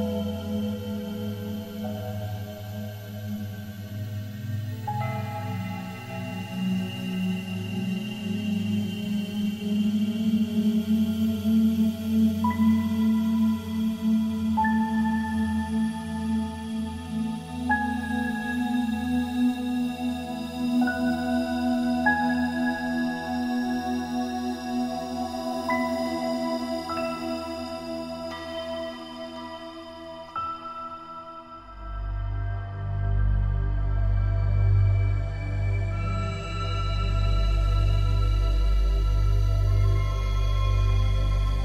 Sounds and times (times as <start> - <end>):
Music: 0.0 - 41.6.